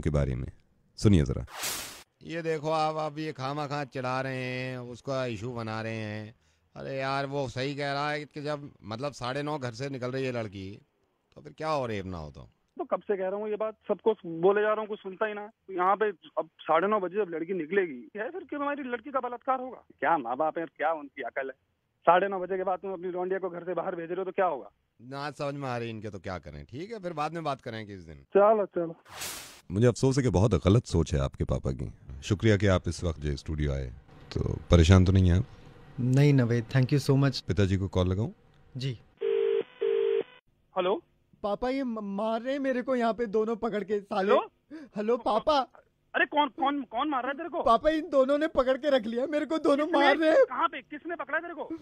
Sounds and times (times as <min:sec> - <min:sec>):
Speech: 0:00.0 - 0:01.5, 0:02.2 - 0:10.8, 0:11.4 - 0:29.0, 0:29.7 - 0:39.0, 0:40.8 - 0:51.8.